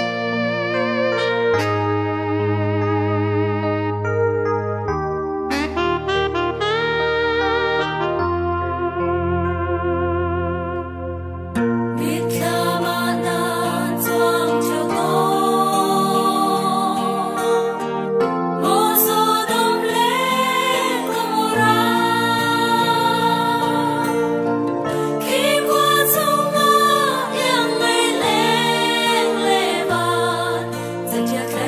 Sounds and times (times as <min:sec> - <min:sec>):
Music: 0:00.0 - 0:31.6.